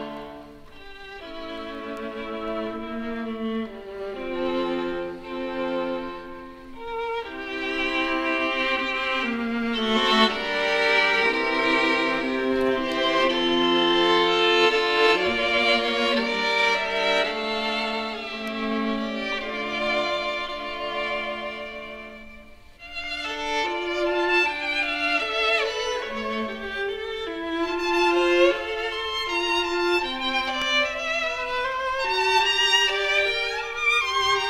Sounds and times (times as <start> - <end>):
Violin, fiddle: 0.0 - 34.4.